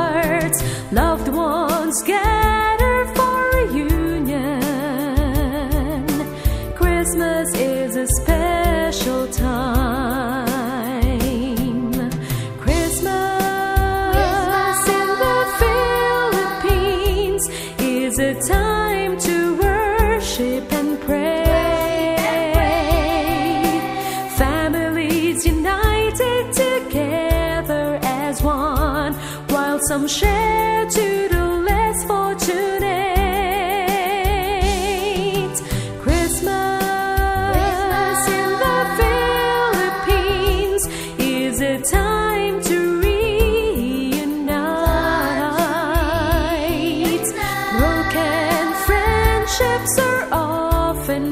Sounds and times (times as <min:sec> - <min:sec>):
Christian music: 0:00.0 - 0:51.3
Christmas music: 0:12.2 - 0:30.0, 0:35.1 - 0:51.3.